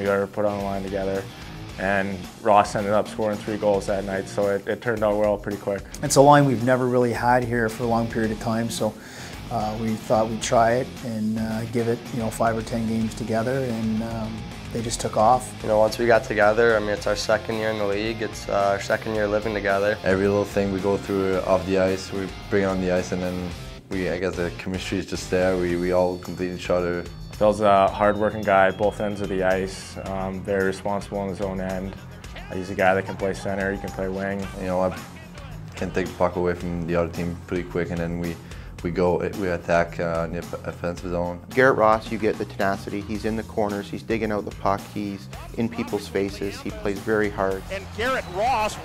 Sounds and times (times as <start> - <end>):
Music: 0.0 - 48.8
Speech: 0.0 - 48.8.